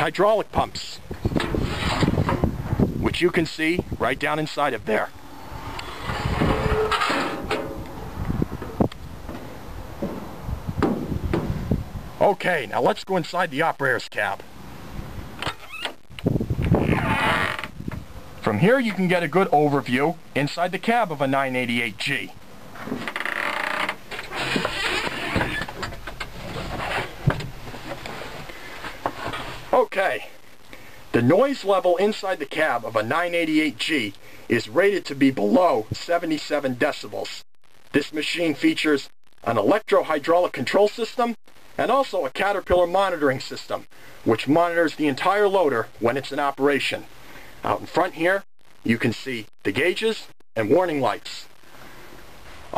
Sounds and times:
Speech: 0.0s - 1.1s, 3.0s - 5.1s, 12.2s - 14.5s, 18.4s - 22.4s, 29.7s - 30.4s, 31.1s - 37.4s, 38.0s - 51.5s.

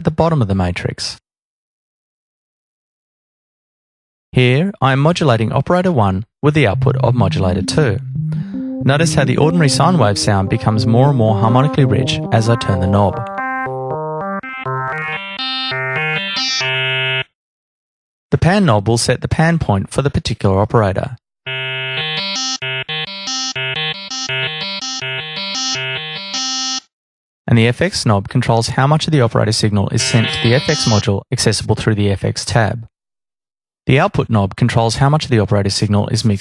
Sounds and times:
Synthesizer: 6.8s - 17.2s, 21.6s - 26.5s, 30.0s - 31.0s.

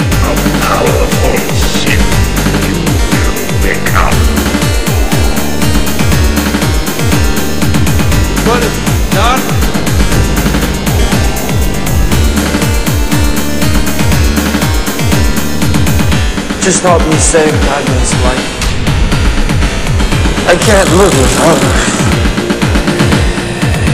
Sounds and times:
Dubstep: 0.0s - 15.6s, 20.2s - 22.4s.

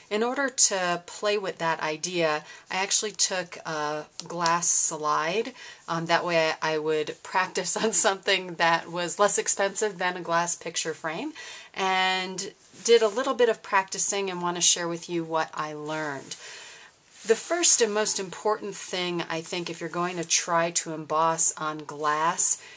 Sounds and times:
Speech: 0.0s - 16.4s, 17.2s - 22.6s.

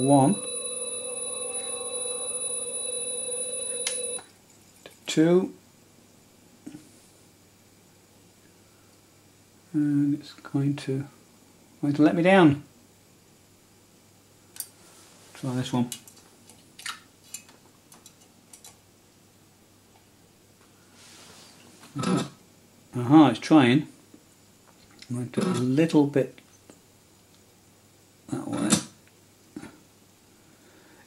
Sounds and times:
Inside, small room: 0.0s - 31.0s
Speech: 5.0s - 5.6s, 9.8s - 11.2s, 11.8s - 12.7s, 15.4s - 16.0s, 23.0s - 23.9s, 25.1s - 26.4s, 28.3s - 29.0s.

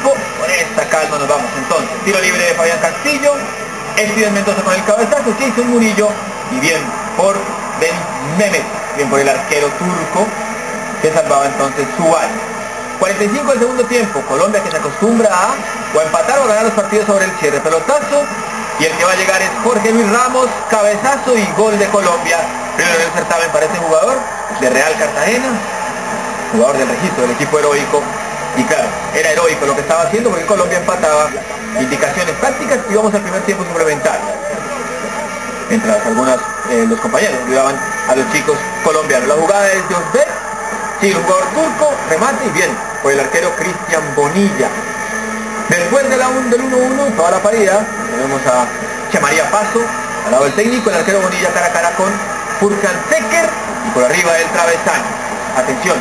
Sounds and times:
Speech: 0.0s - 10.3s, 13.0s - 25.6s, 26.5s - 34.6s, 45.7s - 56.0s.

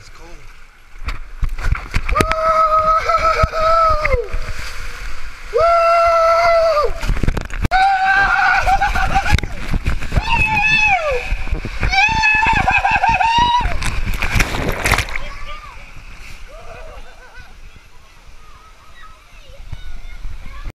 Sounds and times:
Gurgling: 2.1s - 17.3s.

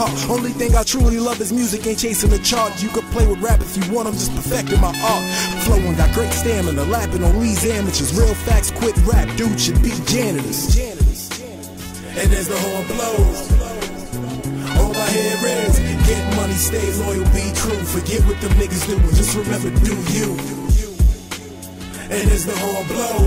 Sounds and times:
Hip hop music: 0.0s - 23.2s
Rapping: 0.0s - 23.2s.

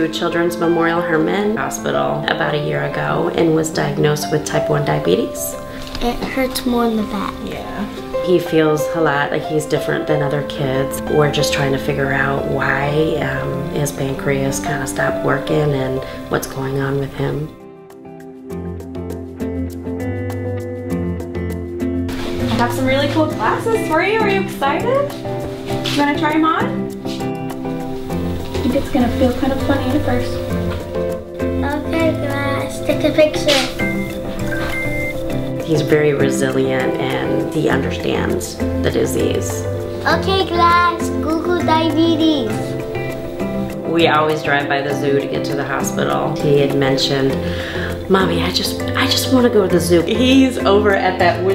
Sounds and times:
Music: 0.0s - 51.5s.

